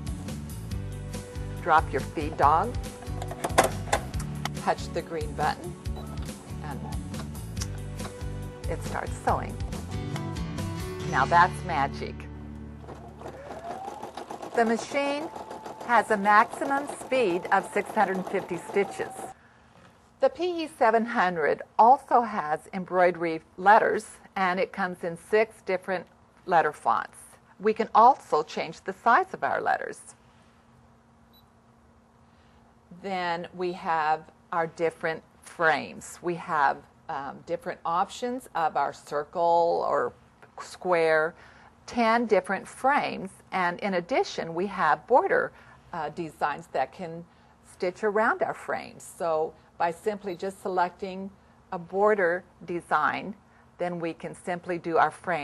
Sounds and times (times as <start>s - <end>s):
Speech: 1.6s - 2.8s, 4.6s - 5.7s, 6.6s - 7.0s, 8.7s - 9.6s, 11.1s - 12.2s, 14.6s - 15.3s, 15.9s - 19.2s, 20.2s - 30.2s, 33.0s - 55.4s.